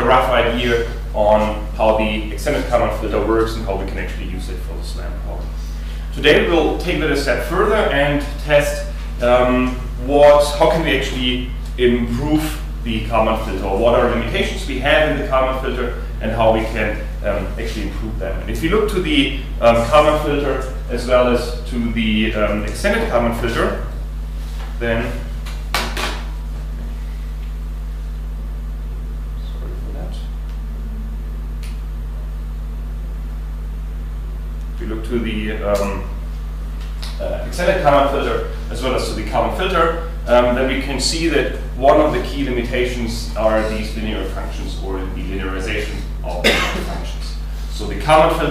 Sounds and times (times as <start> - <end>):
Speech: 0.0 - 24.0, 24.8 - 25.3, 29.4 - 31.2, 34.8 - 36.2, 37.2 - 48.5.